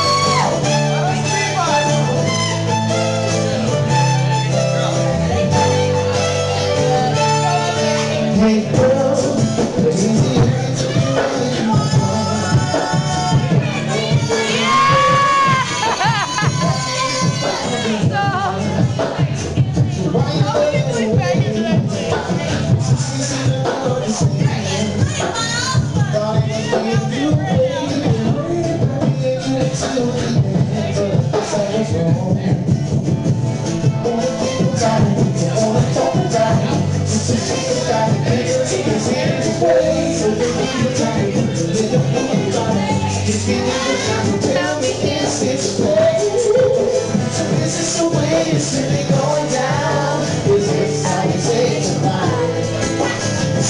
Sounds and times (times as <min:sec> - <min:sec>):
Musical instrument: 0:00.0 - 0:53.7.